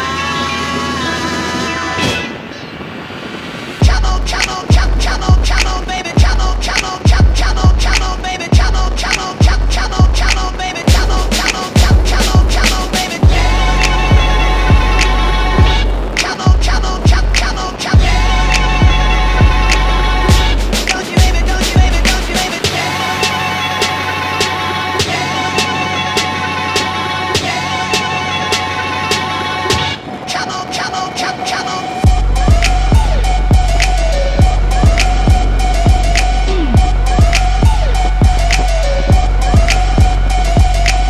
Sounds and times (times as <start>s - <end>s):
Music: 0.0s - 2.6s, 3.7s - 41.0s.